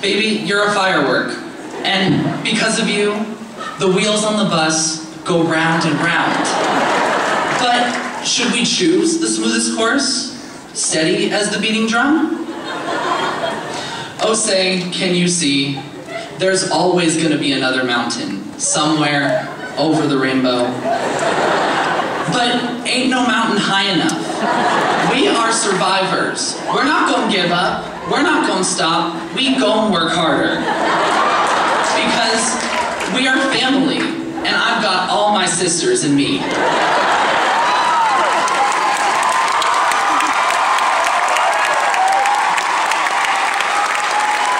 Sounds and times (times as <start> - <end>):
Male speech, man speaking: 0.0 - 6.6, 7.6 - 12.4, 14.2 - 20.8, 22.3 - 24.3, 25.0 - 30.7, 31.9 - 36.4
Narration, monologue: 0.0 - 12.7, 13.6 - 30.9, 31.6 - 36.5.